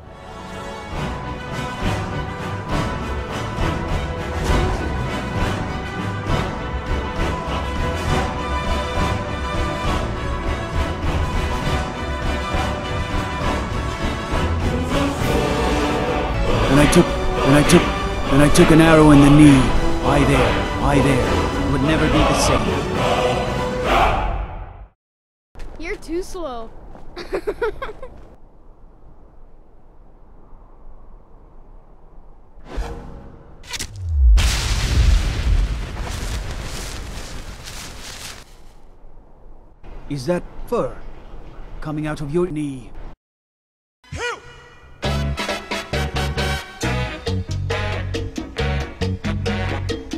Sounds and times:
Music: 0.0s - 24.4s, 44.1s - 50.1s
Speech: 16.7s - 22.7s, 25.8s - 26.7s, 41.8s - 43.0s.

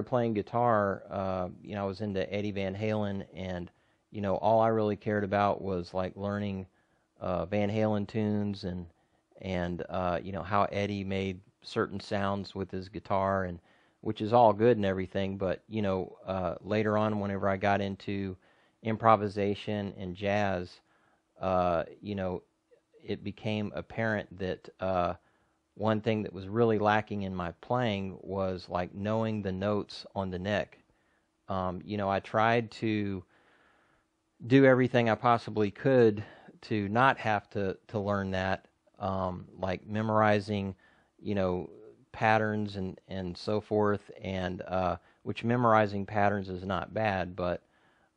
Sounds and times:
Speech: 0.0s - 20.8s, 21.4s - 25.2s, 25.8s - 30.8s, 31.5s - 33.3s, 34.4s - 47.7s.

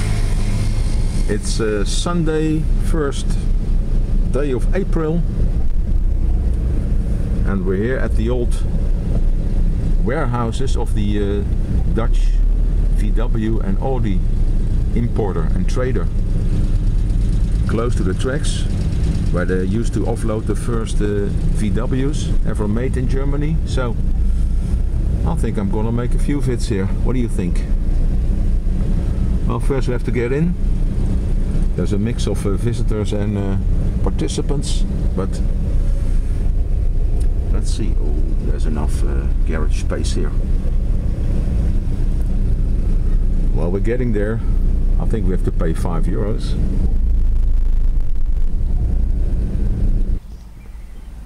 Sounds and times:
Vehicle: 0.0s - 51.2s
Speech: 1.3s - 3.5s, 4.3s - 5.3s, 7.4s - 8.7s, 10.0s - 14.3s, 14.9s - 16.2s, 17.6s - 24.0s, 25.2s - 27.7s, 29.5s - 30.6s, 31.8s - 35.5s, 37.5s - 40.4s, 43.5s - 46.6s.

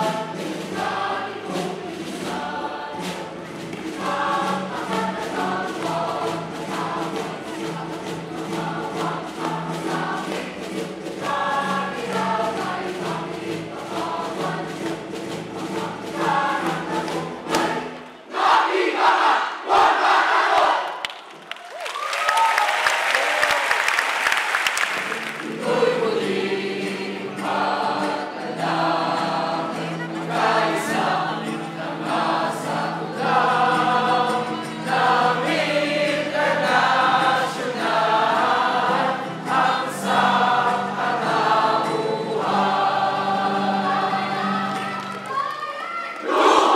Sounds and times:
Music: 0.0s - 21.2s, 23.6s - 46.7s
Inside, large room or hall: 0.0s - 46.7s.

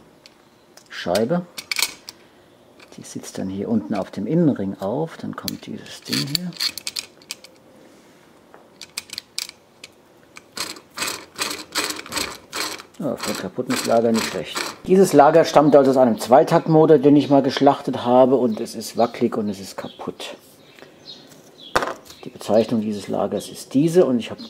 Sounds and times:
Speech: 0.9s - 1.5s, 2.9s - 6.6s, 13.0s - 20.5s, 22.2s - 24.4s.

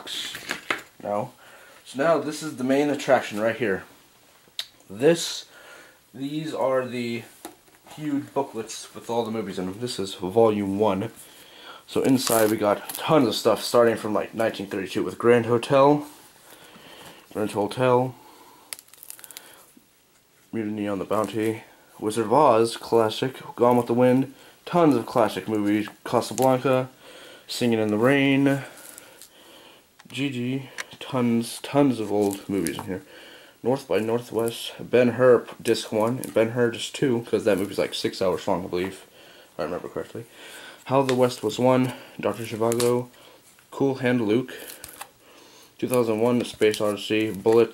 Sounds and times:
Speech: 0.0s - 3.9s, 4.9s - 5.5s, 6.1s - 11.2s, 11.9s - 16.1s, 17.3s - 18.2s, 20.5s - 26.9s, 27.5s - 28.8s, 30.1s - 43.1s, 43.7s - 44.6s, 45.8s - 47.7s
Inside, small room: 0.0s - 47.7s.

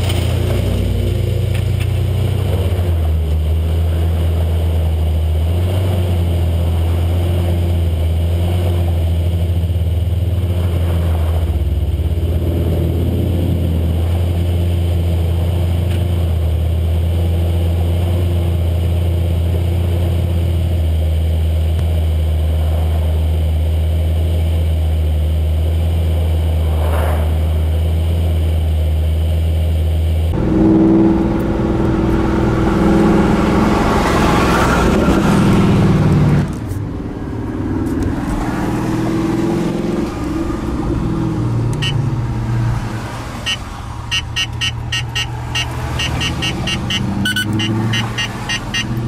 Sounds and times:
Car: 0.0s - 49.0s
Outside, rural or natural: 0.0s - 49.0s.

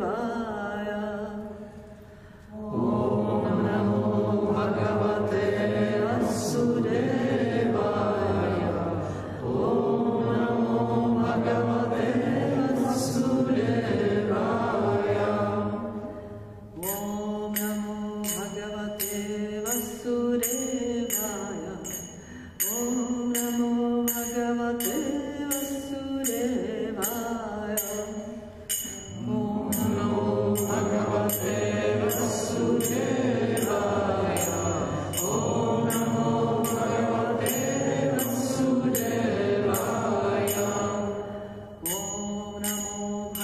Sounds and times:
Mantra: 0.0s - 1.9s, 2.5s - 43.4s.

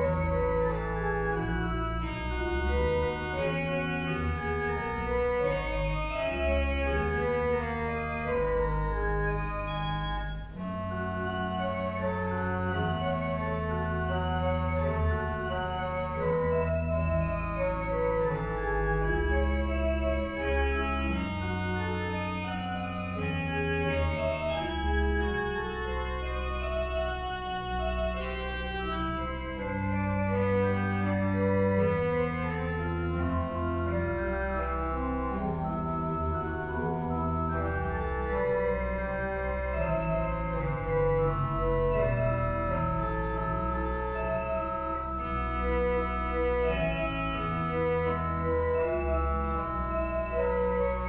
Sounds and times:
Hammond organ: 0.0s - 51.0s.

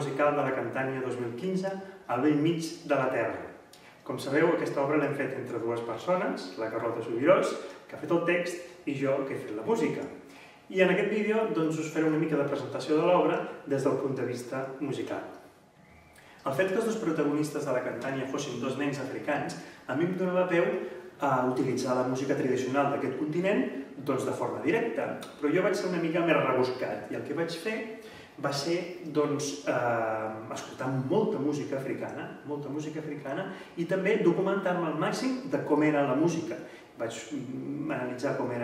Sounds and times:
Speech: 0.0s - 15.4s, 16.4s - 38.6s.

